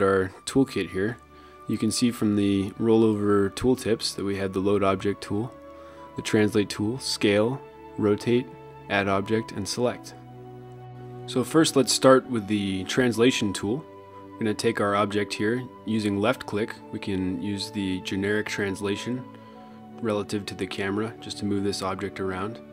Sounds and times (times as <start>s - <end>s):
Speech: 0.0s - 5.6s, 6.2s - 10.2s, 11.3s - 13.8s, 14.4s - 19.3s, 20.0s - 22.6s
Music: 0.0s - 22.7s.